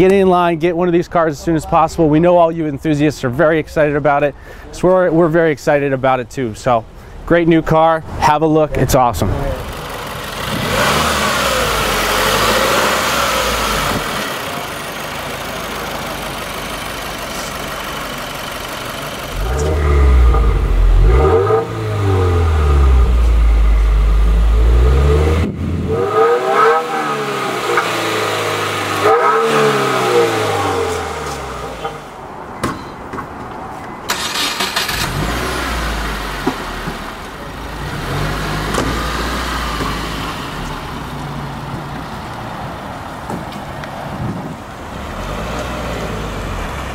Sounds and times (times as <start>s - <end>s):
Vehicle: 0.0s - 46.9s
Accelerating, revving, vroom: 10.4s - 14.4s, 19.4s - 23.2s, 24.5s - 31.7s, 34.6s - 36.9s, 37.8s - 40.4s, 45.1s - 46.9s.